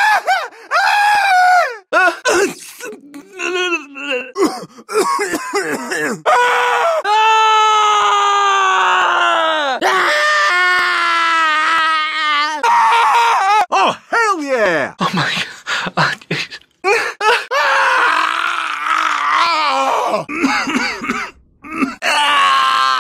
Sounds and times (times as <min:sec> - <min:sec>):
Speech: 0:13.7 - 0:16.6.